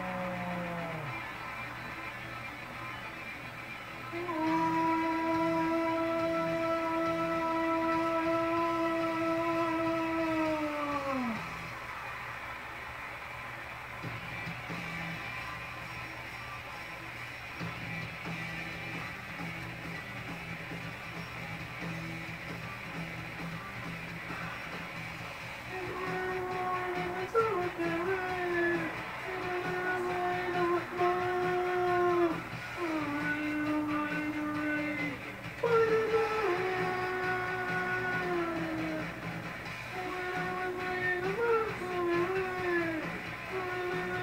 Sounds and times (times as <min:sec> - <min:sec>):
Electric guitar: 0:00.0 - 0:44.2.